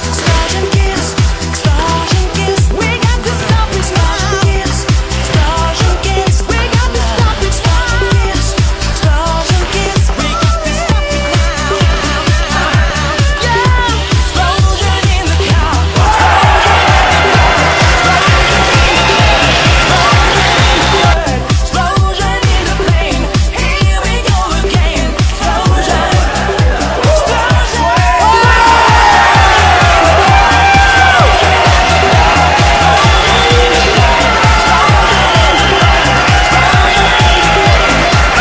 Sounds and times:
Dance music: 0.0 - 38.4.

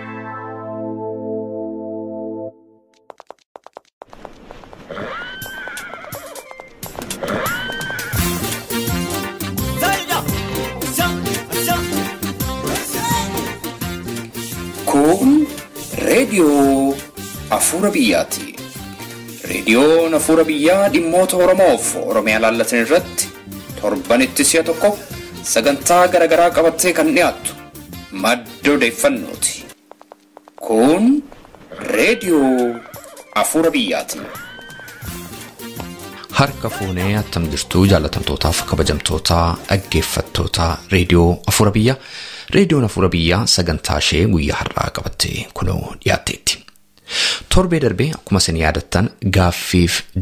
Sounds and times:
Music: 0.0 - 2.9, 6.4 - 29.8, 32.2 - 41.3
Speech: 9.8 - 12.0, 14.9 - 18.6, 19.4 - 29.7, 30.6 - 32.8, 33.4 - 34.3, 36.3 - 46.7, 47.5 - 50.2.

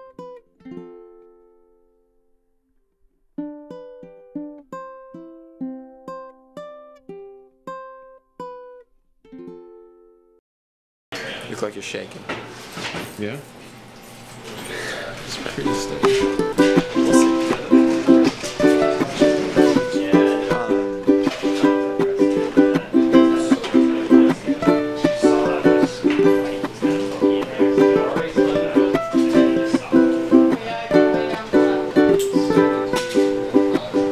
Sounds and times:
Music: 0.0 - 2.4, 3.4 - 10.4, 15.5 - 34.1
Speech: 11.2 - 12.3, 13.0 - 13.6, 14.5 - 34.1.

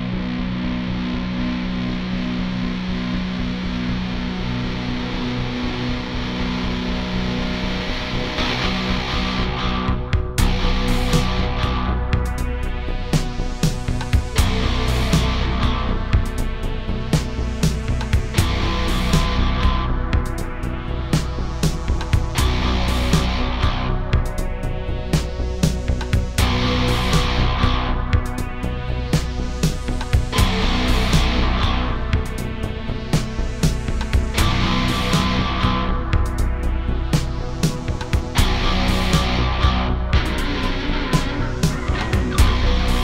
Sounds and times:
Soundtrack music: 0.0 - 43.0.

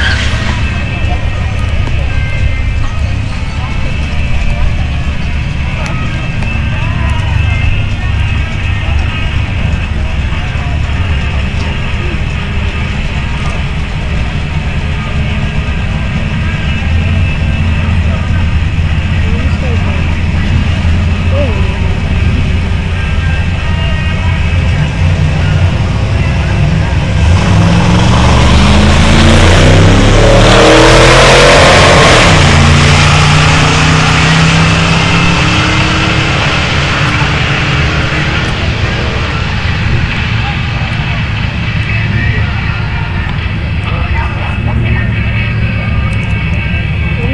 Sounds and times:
Medium engine (mid frequency): 0.0 - 47.3
Race car, auto racing: 0.0 - 47.3
Truck: 0.0 - 47.3.

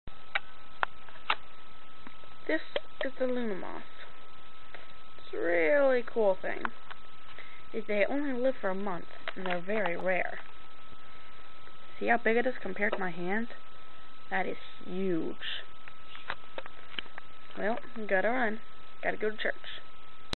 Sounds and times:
Speech: 2.5 - 4.0, 5.2 - 6.8, 7.8 - 10.5, 12.0 - 13.6, 14.3 - 15.7, 17.6 - 19.9.

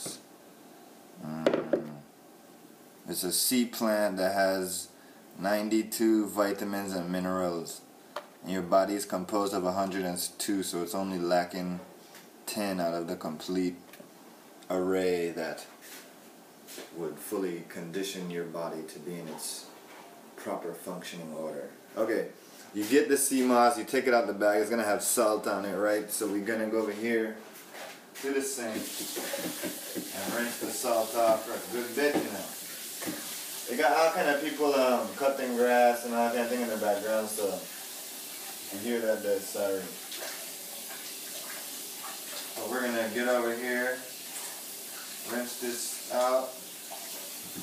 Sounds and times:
Speech: 3.1 - 11.9, 12.5 - 13.8, 14.6 - 15.8, 16.9 - 19.8, 20.4 - 27.5, 28.2 - 28.9, 30.1 - 32.6, 33.7 - 37.7, 38.7 - 40.0, 42.6 - 44.1, 45.3 - 46.6.

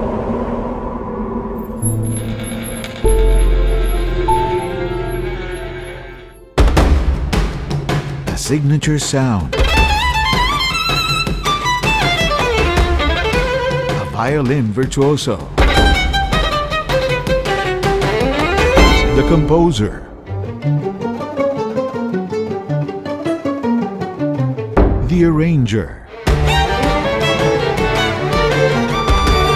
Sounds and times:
Pizzicato: 15.6 - 25.1, 26.1 - 29.5.

